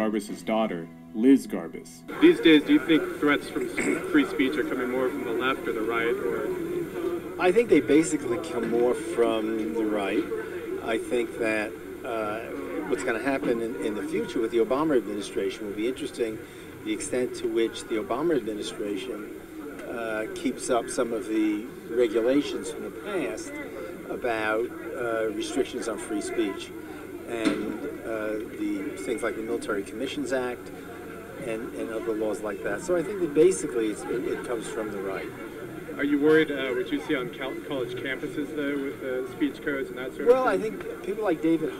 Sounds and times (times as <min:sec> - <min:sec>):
Male speech, man speaking: 0:00.0 - 0:06.7, 0:07.4 - 0:30.7, 0:31.4 - 0:35.4, 0:36.0 - 0:41.7
Conversation: 0:00.0 - 0:41.7.